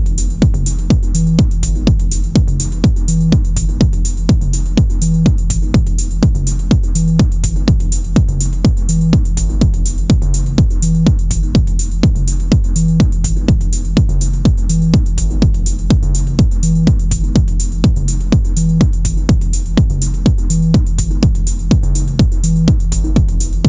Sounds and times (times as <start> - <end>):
Techno: 0.0 - 23.6.